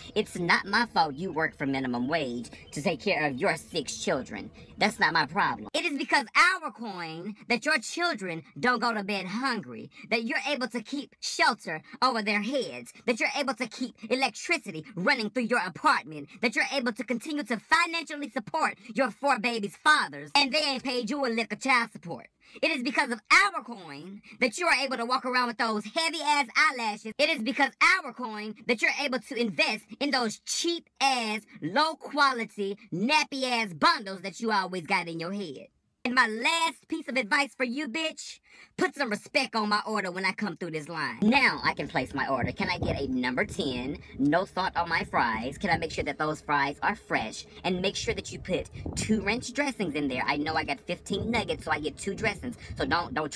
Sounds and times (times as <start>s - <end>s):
Speech: 0.0s - 53.3s.